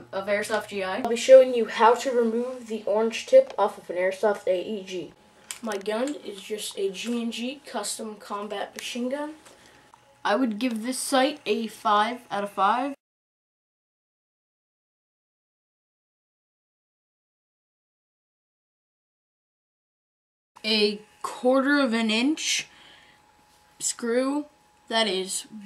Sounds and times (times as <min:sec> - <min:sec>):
Speech: 0:00.0 - 0:09.4, 0:10.3 - 0:13.0, 0:20.6 - 0:22.7, 0:23.8 - 0:25.6.